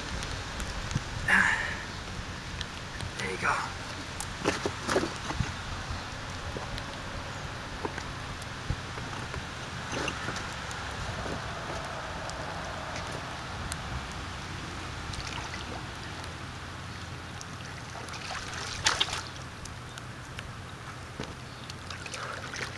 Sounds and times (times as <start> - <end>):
Pour: 21.8 - 22.7.